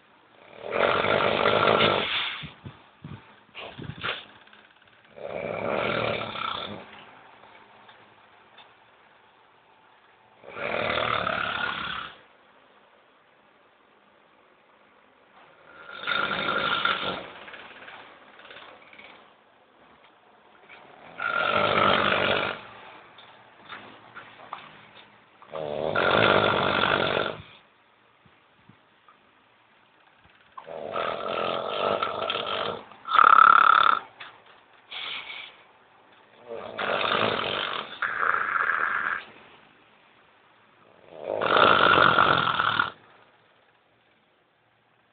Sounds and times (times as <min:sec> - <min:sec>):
Snoring: 0:00.4 - 0:02.6, 0:05.1 - 0:07.0, 0:10.4 - 0:12.2, 0:15.6 - 0:17.6, 0:20.8 - 0:22.7, 0:25.5 - 0:27.6, 0:30.6 - 0:34.1, 0:36.4 - 0:39.3, 0:40.9 - 0:43.0.